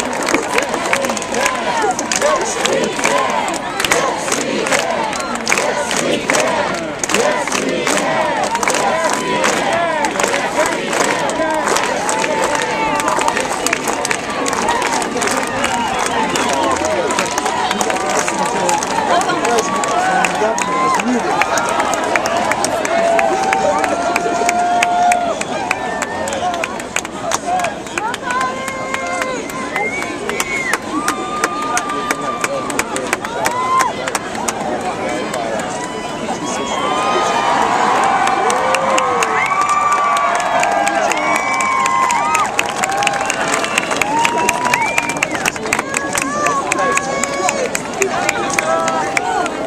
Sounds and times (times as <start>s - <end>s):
Speech: 0.0s - 38.0s, 44.0s - 49.6s
Cheering: 0.0s - 49.6s.